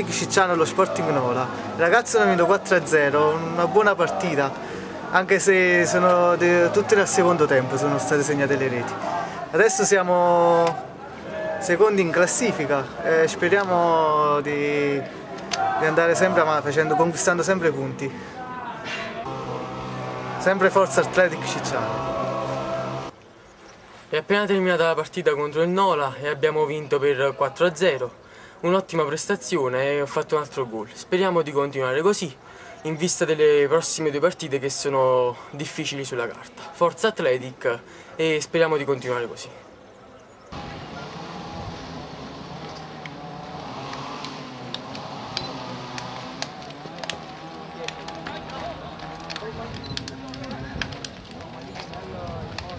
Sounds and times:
Speech: 0:00.0 - 0:19.3, 0:20.4 - 0:22.0, 0:24.1 - 0:39.7, 0:47.6 - 0:52.7.

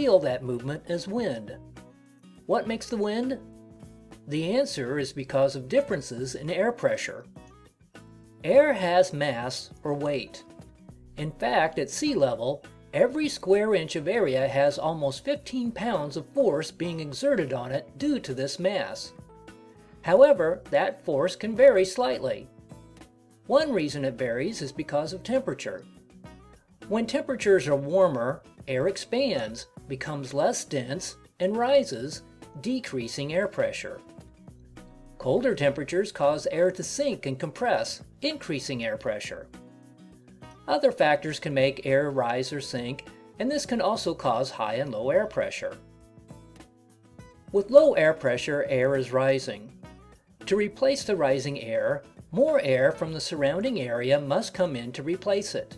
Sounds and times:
Speech: 0:00.0 - 0:01.6, 0:02.5 - 0:03.4, 0:04.3 - 0:07.3, 0:08.4 - 0:10.5, 0:11.2 - 0:19.2, 0:20.1 - 0:22.5, 0:23.5 - 0:25.8, 0:26.9 - 0:34.0, 0:35.2 - 0:39.5, 0:40.7 - 0:45.8, 0:47.5 - 0:49.7, 0:50.5 - 0:55.7
Music: 0:00.0 - 0:55.7.

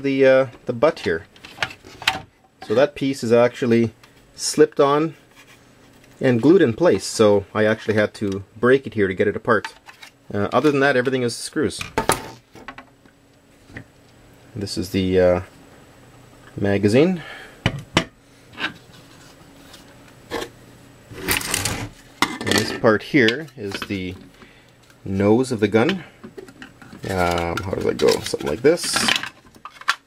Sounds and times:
Speech: 0:00.0 - 0:01.3, 0:02.6 - 0:05.2, 0:06.2 - 0:11.9, 0:14.6 - 0:15.5, 0:16.6 - 0:17.3, 0:22.4 - 0:24.2, 0:25.0 - 0:26.1, 0:27.0 - 0:29.2.

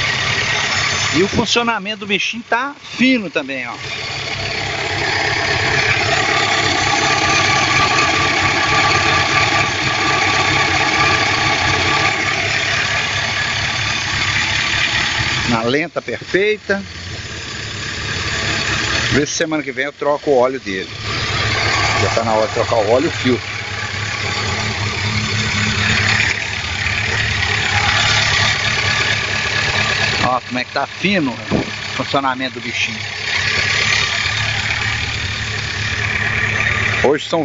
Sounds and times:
Vehicle: 0:00.0 - 0:37.4
Speech: 0:01.2 - 0:03.8, 0:15.5 - 0:16.9, 0:19.1 - 0:20.9, 0:22.0 - 0:23.4, 0:30.2 - 0:33.0, 0:37.0 - 0:37.4.

